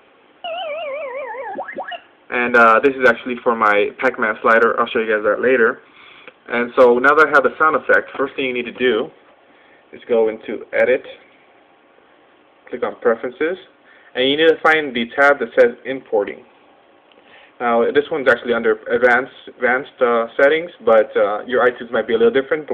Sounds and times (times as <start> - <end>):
Speech: 2.3 - 5.8, 6.5 - 9.2, 9.9 - 11.3, 12.6 - 16.5, 17.6 - 22.7.